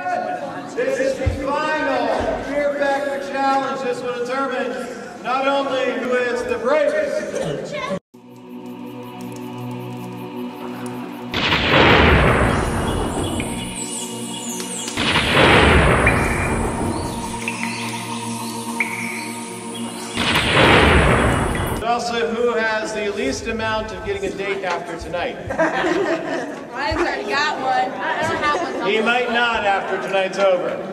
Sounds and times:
Inside, large room or hall: 0.0 - 8.0, 10.0 - 30.9
Music: 8.2 - 21.8.

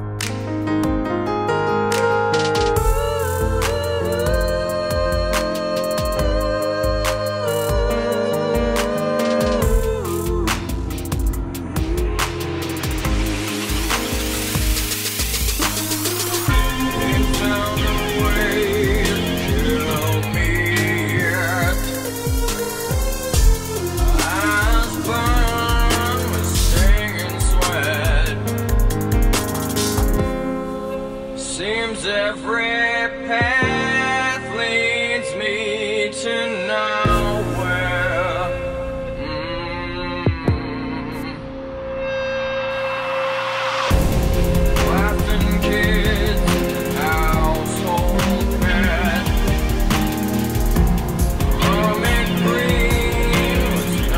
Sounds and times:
Music: 0.0 - 54.1.

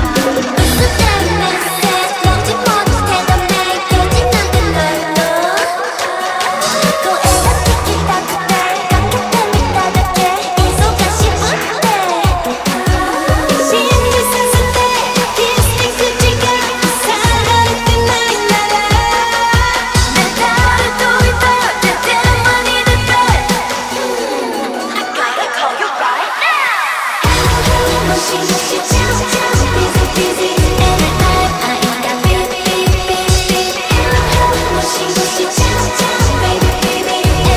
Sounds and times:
Music: 0.0 - 37.5.

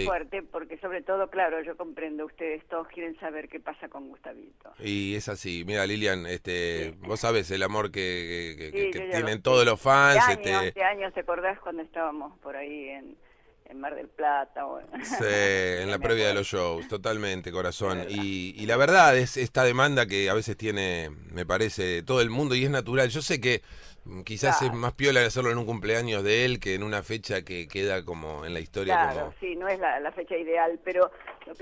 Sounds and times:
Speech: 4.8 - 12.8, 13.8 - 31.6.

